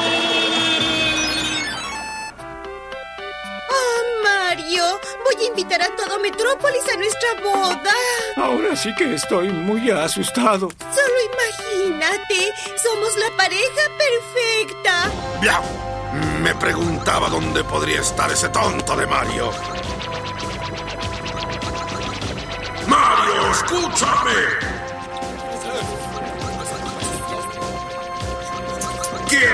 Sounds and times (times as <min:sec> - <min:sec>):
Music: 0:00.0 - 0:29.5.